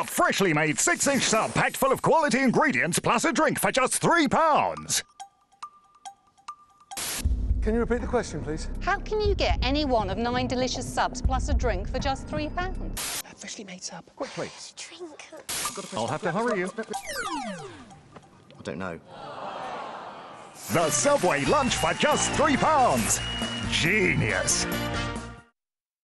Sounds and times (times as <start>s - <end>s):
Music: 4.2s - 13.0s, 20.7s - 25.6s.